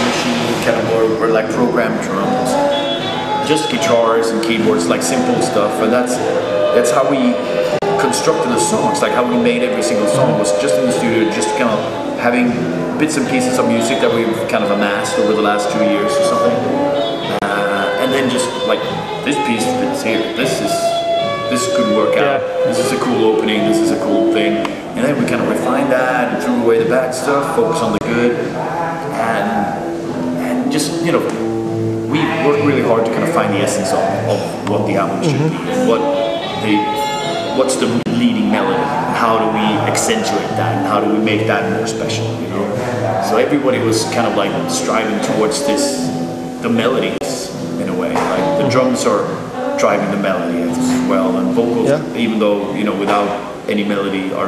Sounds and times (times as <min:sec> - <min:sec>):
Speech: 0:00.0 - 0:02.6, 0:03.4 - 0:31.4, 0:32.1 - 0:54.4
Inside, large room or hall: 0:00.0 - 0:54.4
Music: 0:00.0 - 0:54.4.